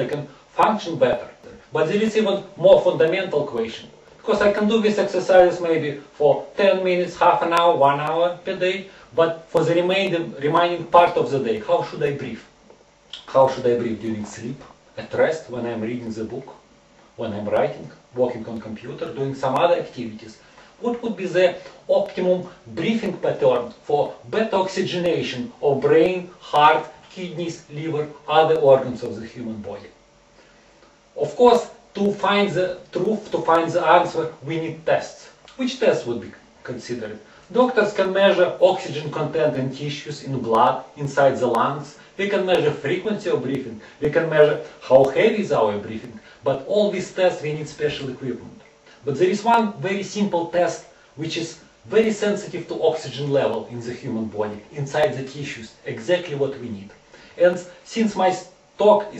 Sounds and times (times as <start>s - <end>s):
Speech: 0.0s - 12.5s, 13.2s - 16.6s, 17.2s - 30.0s, 31.2s - 59.1s.